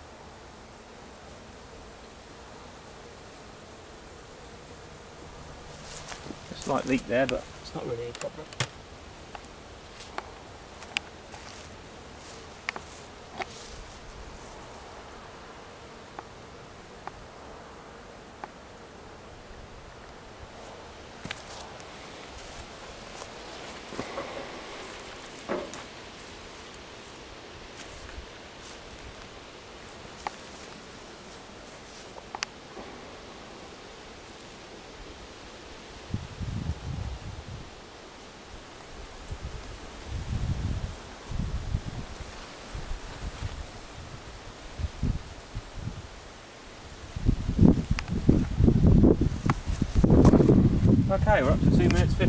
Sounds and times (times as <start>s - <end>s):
Rustling leaves: 0.0s - 52.2s.